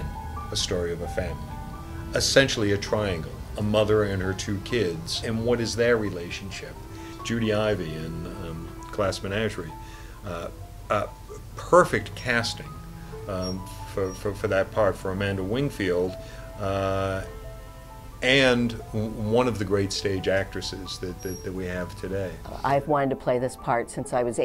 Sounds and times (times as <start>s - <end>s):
Speech: 0.0s - 1.4s, 2.2s - 12.7s, 13.3s - 17.3s, 18.2s - 24.4s
Music: 0.0s - 24.4s.